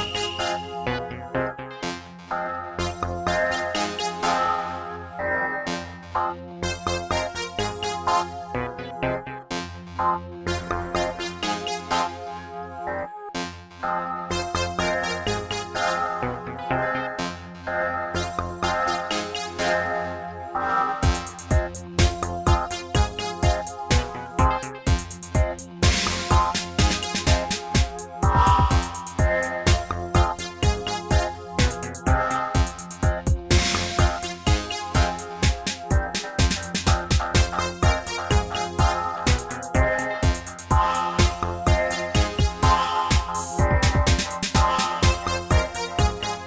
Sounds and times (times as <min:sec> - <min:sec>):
Music: 0:00.0 - 0:46.4.